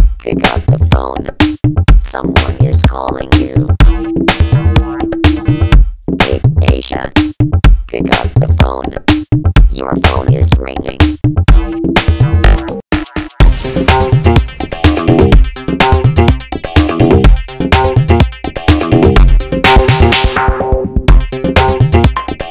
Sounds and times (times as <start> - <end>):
Soundtrack music: 0.2 - 7.3, 7.9 - 22.5.